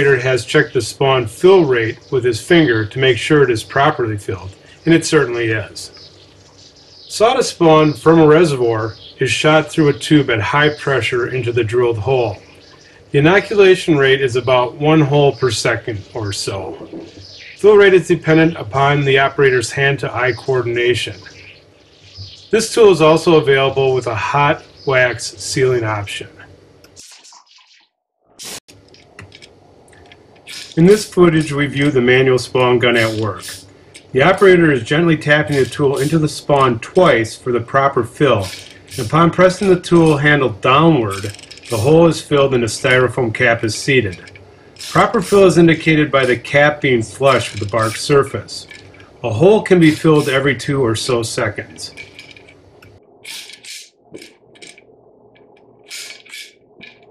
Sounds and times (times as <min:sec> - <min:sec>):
Speech: 0:00.0 - 0:05.9, 0:07.1 - 0:12.4, 0:13.1 - 0:17.0, 0:17.6 - 0:21.3, 0:22.6 - 0:26.5, 0:30.8 - 0:33.6, 0:34.2 - 0:44.3, 0:44.9 - 0:52.0.